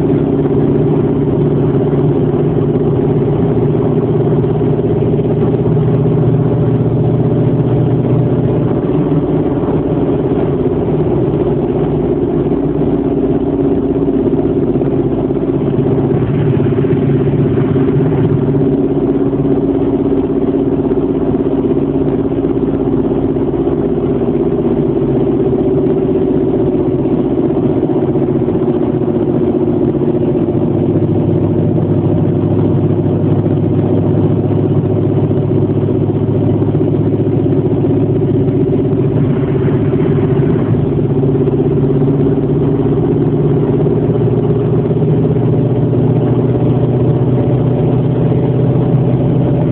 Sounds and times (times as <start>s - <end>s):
Vibration: 0.0s - 49.7s.